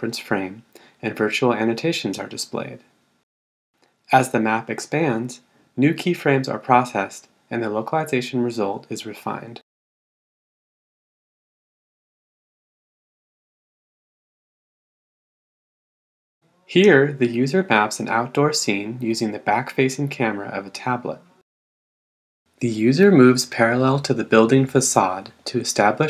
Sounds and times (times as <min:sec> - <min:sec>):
Speech: 0:00.0 - 0:02.9, 0:04.1 - 0:09.7, 0:16.7 - 0:21.4, 0:22.6 - 0:26.0.